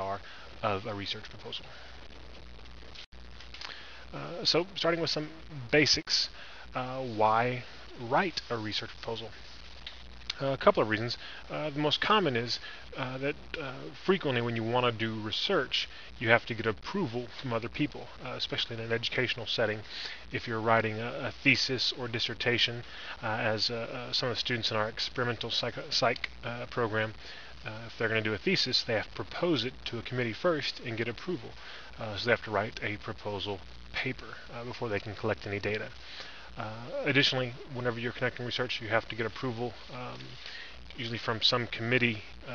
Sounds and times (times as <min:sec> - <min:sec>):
Speech: 0:00.0 - 0:01.8, 0:04.1 - 0:09.4, 0:10.3 - 0:36.0, 0:36.6 - 0:40.4, 0:41.0 - 0:42.5.